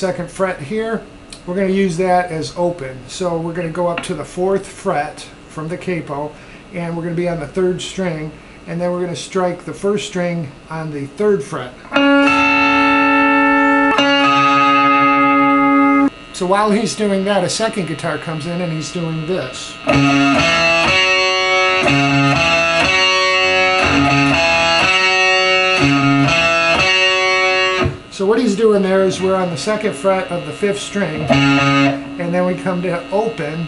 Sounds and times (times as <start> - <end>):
Speech: 0.0 - 11.9, 16.4 - 19.9, 28.1 - 31.3, 32.2 - 33.6
Music: 11.9 - 16.1, 19.8 - 28.1, 28.9 - 33.6.